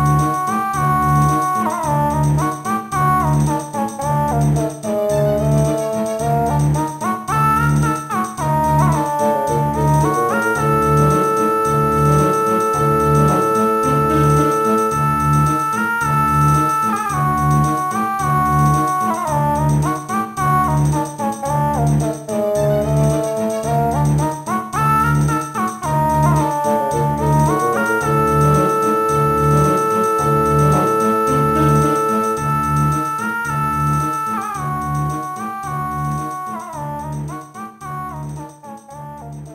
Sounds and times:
Video game music: 0.0 - 39.5.

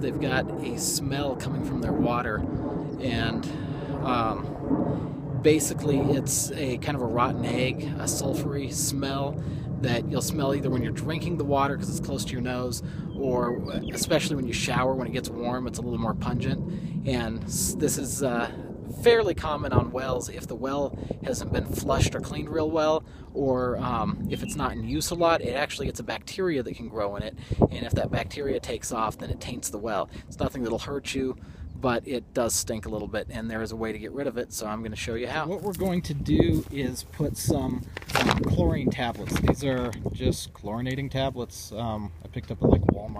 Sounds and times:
Speech: 0.0 - 2.4, 3.0 - 4.5, 5.4 - 43.1.

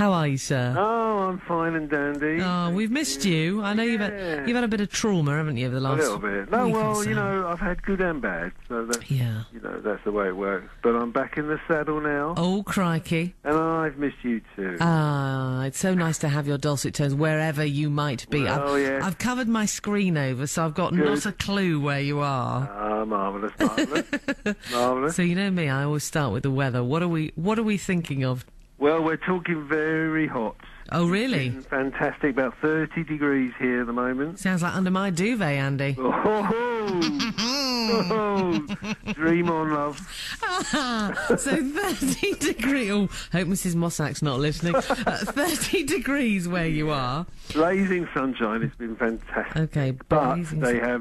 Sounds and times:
Speech: 0.0 - 17.1, 17.8 - 24.1, 24.7 - 51.0.

